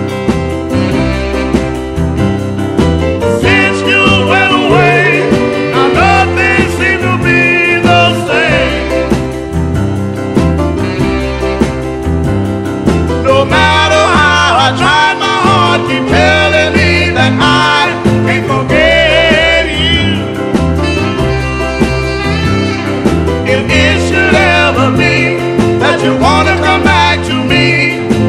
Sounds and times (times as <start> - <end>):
Happy music: 0.0 - 28.2.